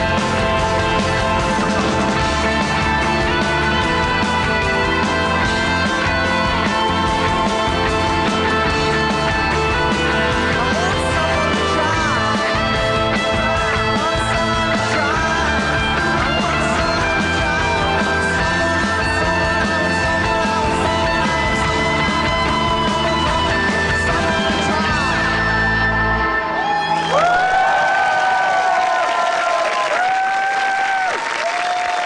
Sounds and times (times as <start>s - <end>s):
Singing: 10.4s - 26.0s.